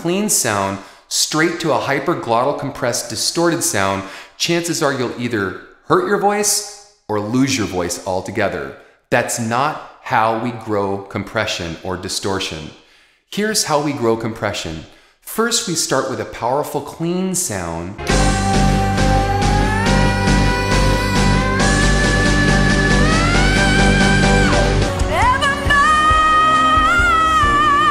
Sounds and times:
Speech: 0.0s - 18.0s.

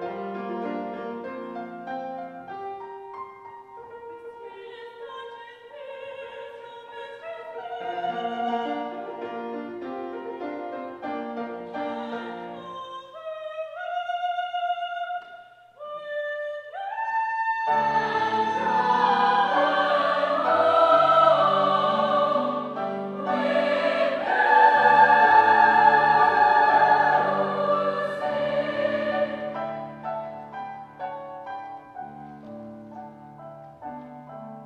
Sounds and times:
Choir: 4.6s - 9.4s, 11.7s - 15.3s, 16.7s - 30.5s.

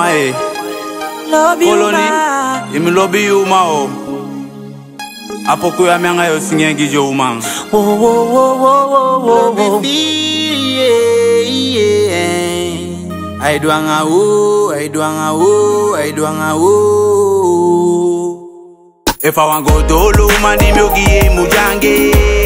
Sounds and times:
Music: 0.0s - 18.4s, 19.1s - 22.4s.

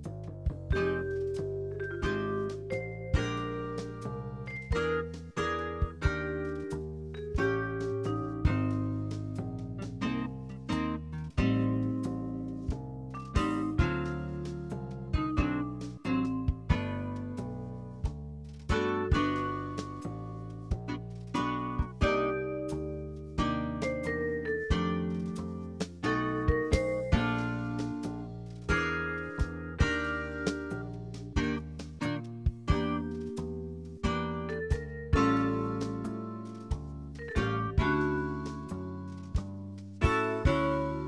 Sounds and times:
Jazz: 0.0s - 41.0s.

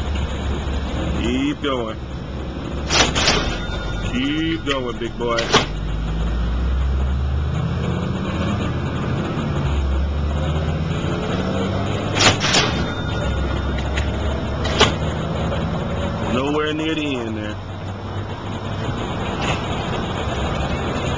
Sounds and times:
Car: 0.0s - 21.1s
Outside, urban or manmade: 0.0s - 21.1s
Speech: 1.2s - 2.0s, 4.1s - 5.6s, 16.3s - 17.6s.

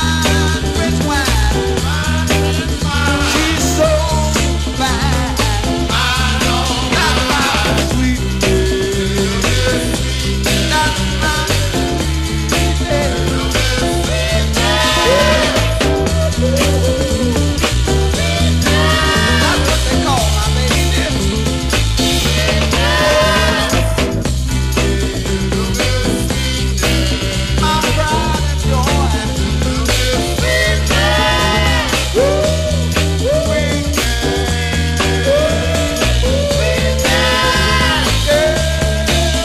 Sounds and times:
Music: 0.0s - 39.4s.

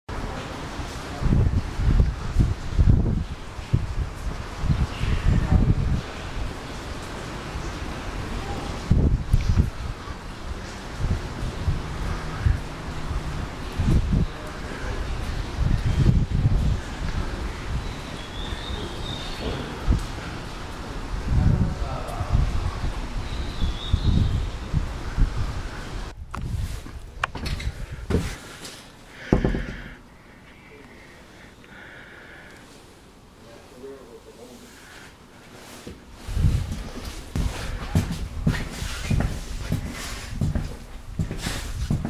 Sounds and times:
Rustling leaves: 0.1s - 42.0s.

